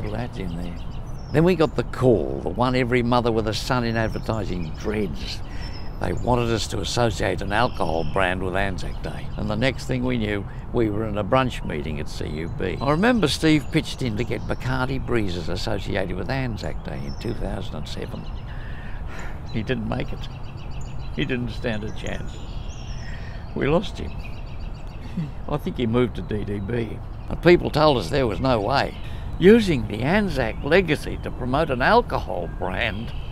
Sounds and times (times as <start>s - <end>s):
Speech: 0.0s - 18.3s, 19.5s - 20.3s, 21.2s - 22.4s, 23.6s - 24.2s, 25.2s - 33.2s.